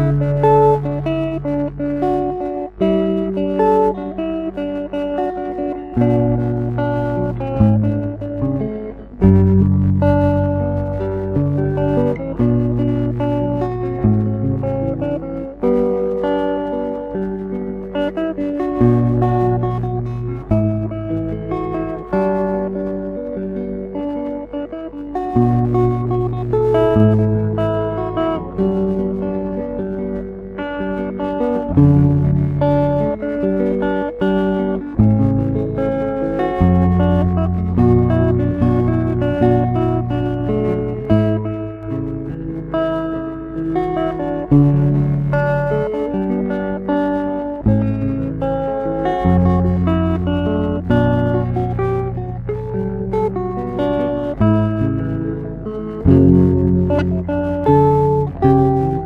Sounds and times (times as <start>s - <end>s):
Acoustic guitar: 0.0s - 59.0s
Strum: 0.0s - 59.0s.